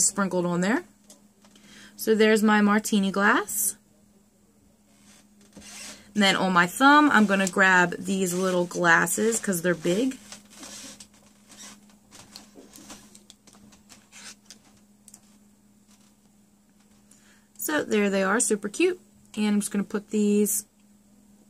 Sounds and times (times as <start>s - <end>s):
Speech: 0.0s - 0.9s, 2.0s - 4.8s, 6.2s - 10.2s, 17.6s - 20.7s
Inside, small room: 0.0s - 21.5s.